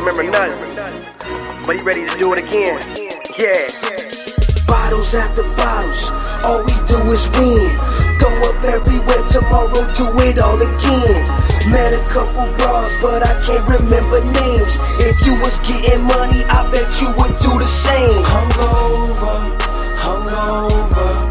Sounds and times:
Independent music: 0.0 - 21.3.

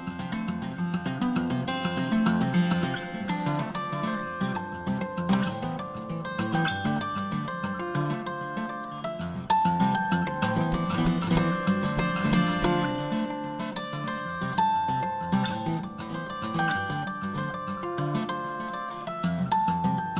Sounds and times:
Acoustic guitar: 0.0 - 20.1.

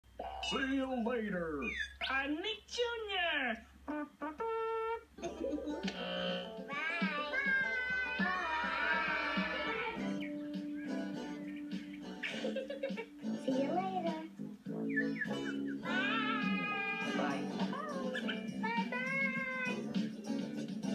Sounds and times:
Inside, small room: 0.0 - 20.9
Speech: 0.4 - 3.7
Music: 5.4 - 20.9.

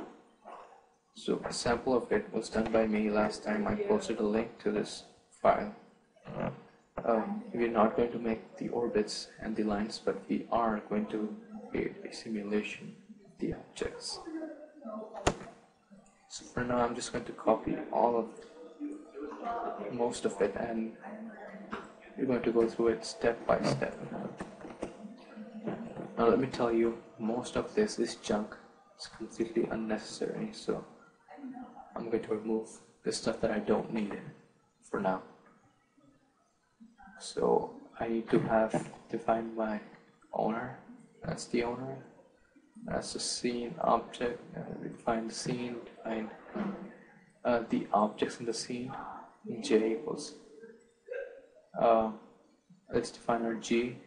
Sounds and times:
Speech: 1.2 - 5.7, 6.3 - 15.5, 16.3 - 30.8, 31.4 - 34.3, 35.0 - 35.2, 37.1 - 42.0, 42.8 - 50.4, 51.1 - 52.2, 52.9 - 54.0.

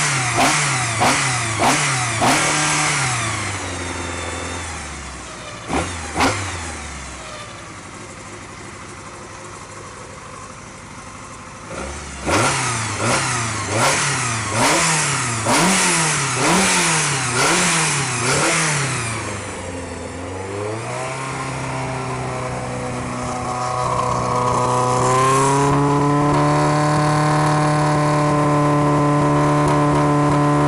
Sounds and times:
Accelerating, revving, vroom: 0.0 - 4.8, 5.7 - 6.8, 11.7 - 19.4, 20.5 - 30.6
Car: 0.0 - 30.6.

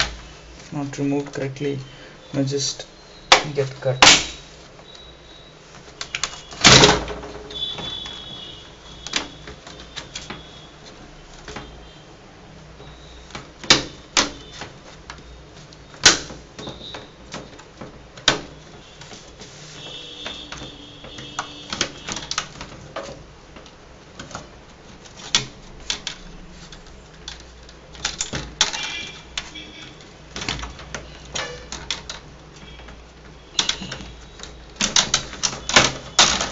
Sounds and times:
Inside, small room: 0.0 - 36.5.

